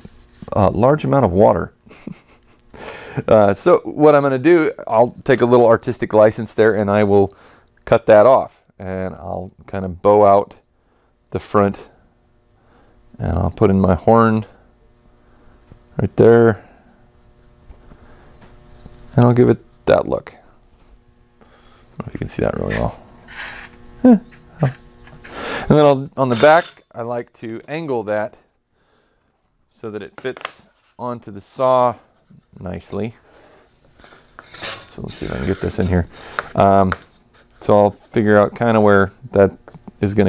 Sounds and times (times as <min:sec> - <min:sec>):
Speech: 0:00.4 - 0:01.8, 0:03.2 - 0:10.6, 0:11.3 - 0:12.0, 0:13.2 - 0:14.6, 0:16.0 - 0:16.7, 0:19.2 - 0:20.5, 0:22.0 - 0:23.0, 0:25.7 - 0:28.5, 0:29.7 - 0:33.2, 0:34.8 - 0:40.2.